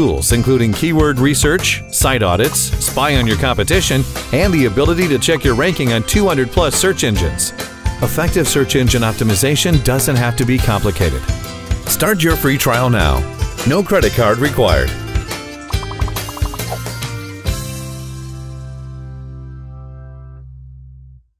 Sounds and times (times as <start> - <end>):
Speech: 0.0 - 11.3, 11.9 - 15.0
Music: 0.0 - 21.3.